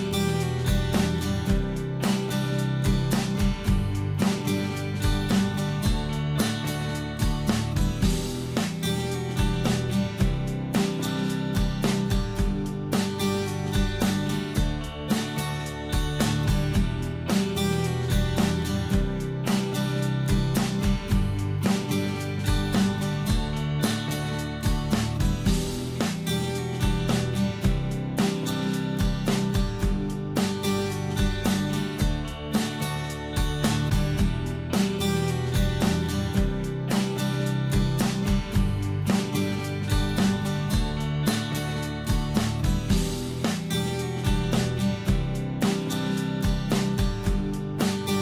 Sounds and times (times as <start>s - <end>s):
Music: 0.0s - 48.2s.